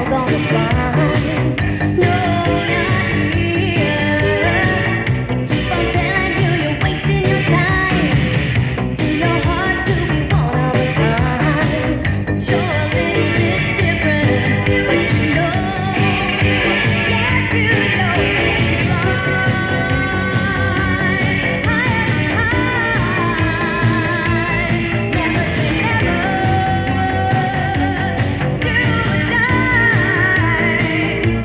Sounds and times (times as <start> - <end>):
Pop music: 0.0 - 31.4.